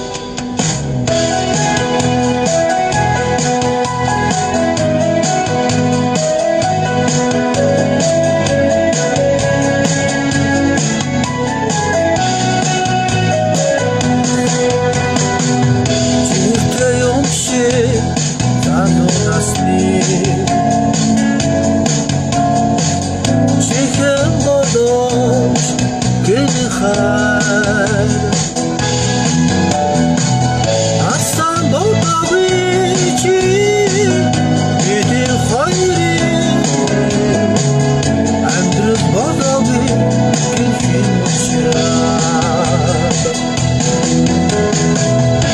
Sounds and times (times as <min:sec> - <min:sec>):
Electronic organ: 0:00.0 - 0:45.5.